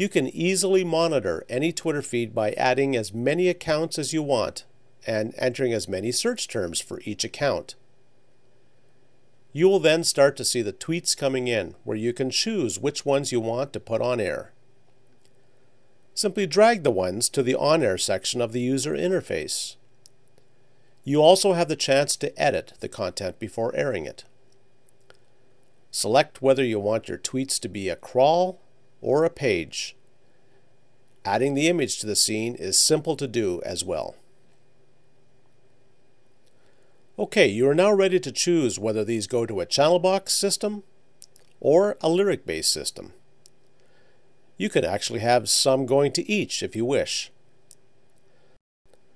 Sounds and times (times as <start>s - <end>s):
Speech: 0.0s - 7.8s, 9.5s - 14.6s, 16.2s - 19.8s, 21.0s - 24.3s, 25.9s - 30.0s, 31.2s - 34.2s, 37.2s - 40.9s, 41.6s - 43.2s, 44.6s - 47.4s.